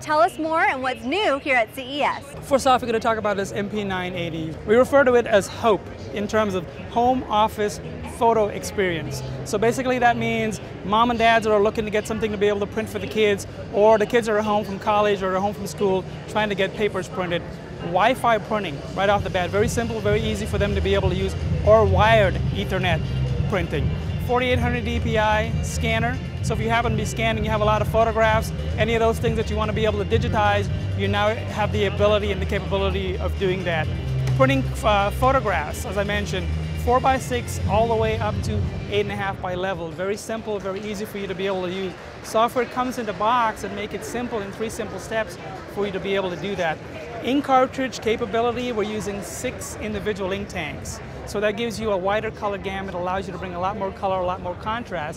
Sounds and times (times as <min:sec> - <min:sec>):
Speech: 0:00.0 - 0:55.1
Music: 0:02.5 - 0:46.6.